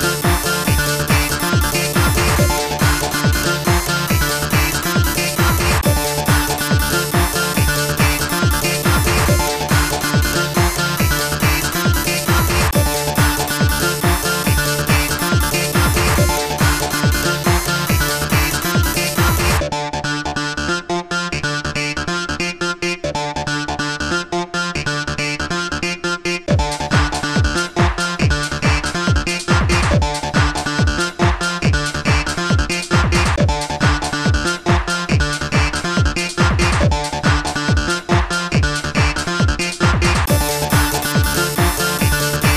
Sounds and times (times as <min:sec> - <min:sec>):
Music: 0:00.0 - 0:42.5.